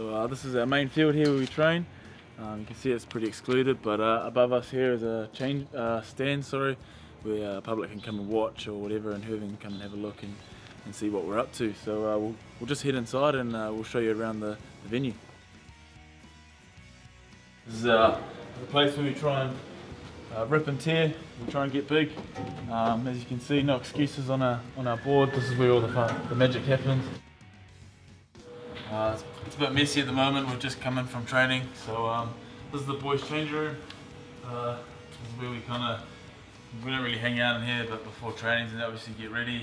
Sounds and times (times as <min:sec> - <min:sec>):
Speech: 0:00.0 - 0:01.8, 0:02.4 - 0:15.2, 0:17.7 - 0:19.6, 0:20.3 - 0:27.2, 0:28.9 - 0:33.8, 0:34.4 - 0:36.1, 0:36.8 - 0:39.6
Music: 0:00.0 - 0:39.6.